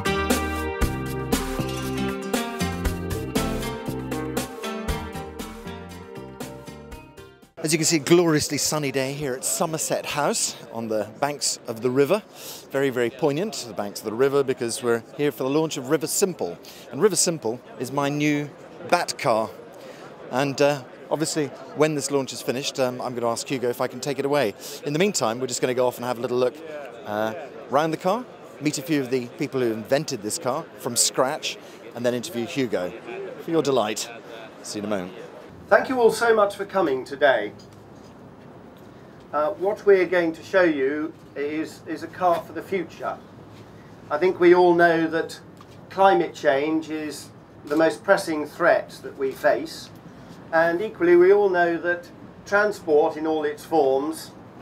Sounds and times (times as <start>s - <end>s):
Speech: 7.6s - 19.6s, 20.3s - 37.6s, 39.3s - 43.2s, 44.1s - 54.4s.